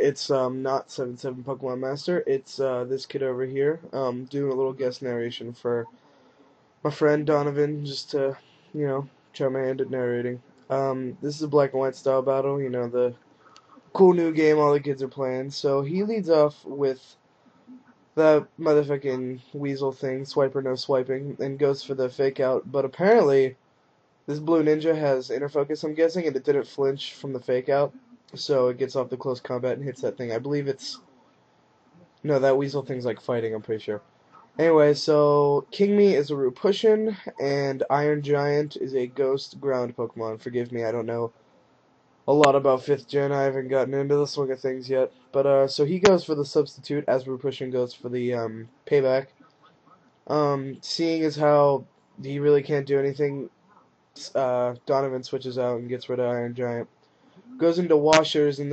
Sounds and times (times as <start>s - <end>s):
Narration, monologue: 0.0s - 58.7s.